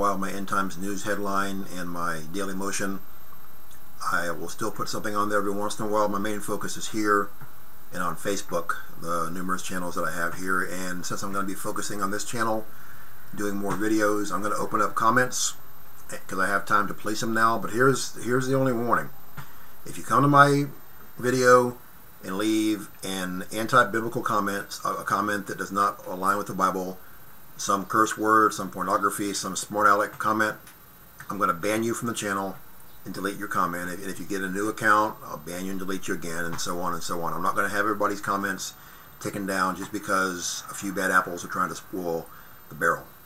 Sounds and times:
Speech: 0.0s - 3.0s, 4.0s - 12.7s, 13.3s - 19.2s, 19.9s - 27.0s, 27.6s - 43.1s.

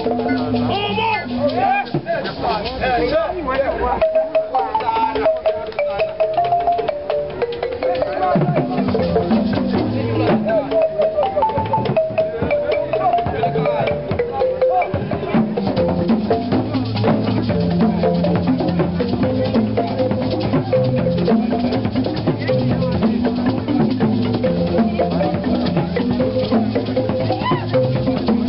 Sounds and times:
Music: 0.0s - 28.4s
Speech: 0.1s - 6.2s, 7.8s - 9.1s, 9.8s - 11.6s, 12.2s - 15.4s, 21.5s - 24.0s.

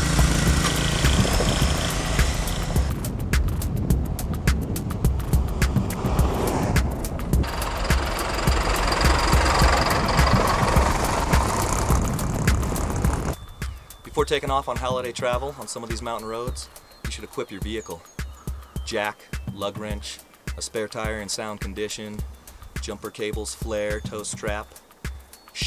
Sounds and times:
Car: 0.0s - 2.9s, 5.0s - 13.4s
Idling: 0.0s - 2.9s, 7.2s - 13.4s.

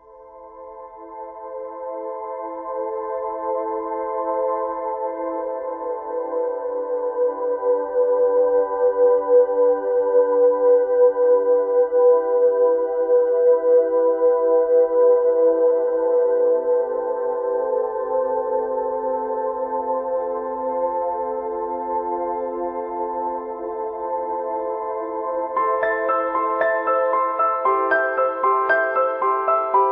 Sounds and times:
Music: 0.0s - 29.9s.

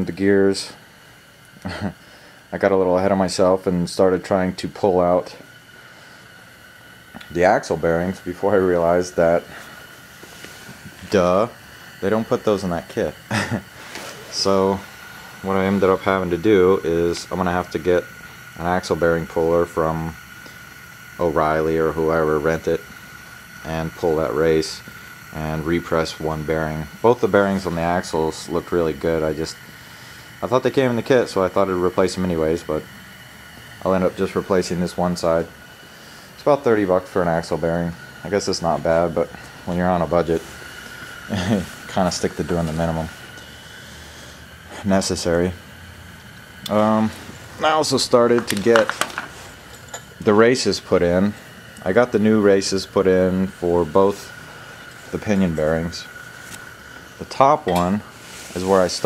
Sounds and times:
Speech: 0.0s - 0.8s, 2.5s - 5.4s, 7.2s - 9.5s, 11.0s - 13.2s, 14.3s - 20.2s, 21.2s - 22.8s, 23.6s - 29.6s, 30.4s - 32.8s, 33.8s - 35.5s, 36.4s - 40.4s, 41.3s - 43.2s, 44.7s - 45.6s, 46.7s - 49.0s, 50.2s - 54.3s, 55.1s - 56.1s, 57.2s - 58.0s, 58.6s - 59.0s.

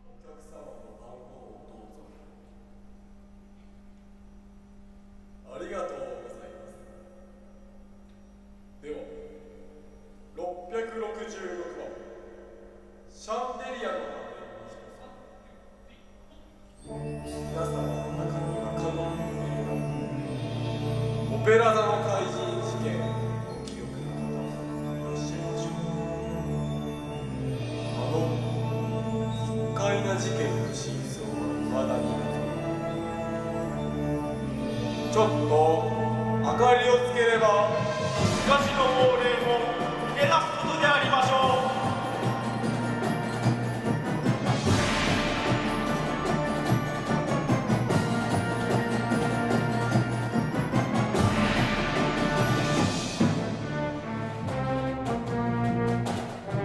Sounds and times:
Speech: 0.0s - 2.3s, 5.5s - 7.0s, 8.8s - 9.4s, 10.4s - 12.2s, 13.1s - 16.1s, 21.3s - 24.1s, 29.8s - 32.3s, 35.1s - 37.8s, 38.4s - 42.0s
Orchestra: 16.8s - 56.6s.

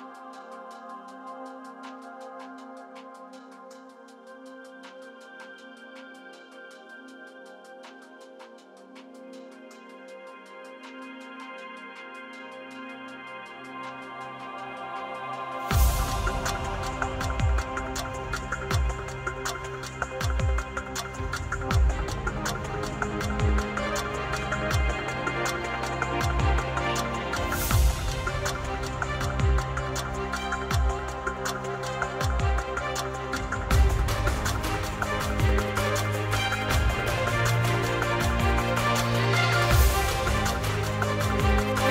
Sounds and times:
Music: 0.0s - 41.9s.

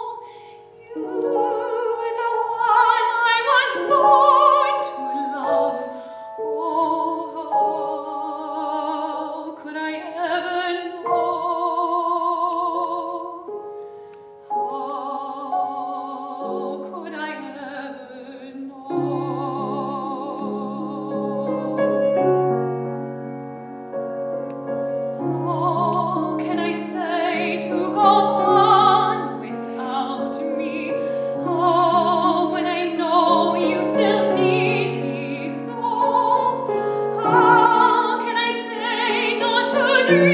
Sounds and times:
Music: 0.0s - 40.3s
Female singing: 0.9s - 13.4s, 14.6s - 21.8s, 25.4s - 40.3s.

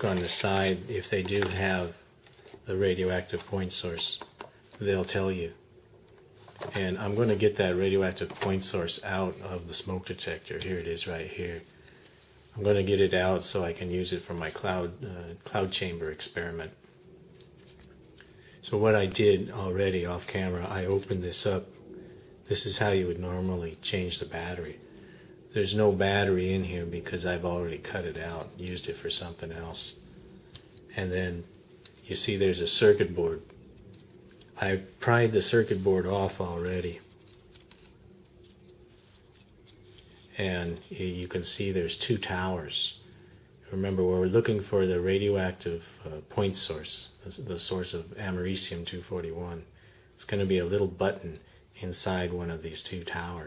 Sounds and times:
Speech: 0.0s - 2.0s, 2.6s - 5.6s, 6.6s - 11.7s, 12.5s - 16.8s, 18.6s - 21.8s, 22.4s - 24.8s, 25.5s - 30.0s, 30.9s - 33.5s, 34.6s - 37.1s, 40.3s - 43.0s, 43.6s - 53.4s.

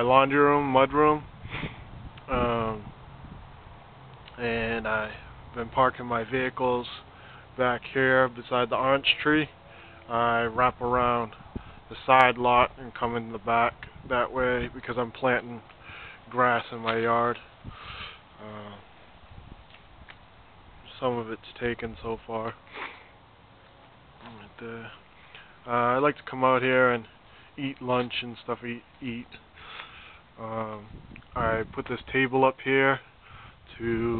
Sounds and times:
Speech: 0.0s - 1.2s, 2.3s - 2.9s, 4.3s - 9.5s, 10.1s - 15.7s, 16.3s - 17.4s, 18.4s - 18.9s, 20.9s - 22.6s, 24.2s - 25.0s, 25.6s - 29.4s, 30.4s - 33.0s, 33.7s - 34.1s.

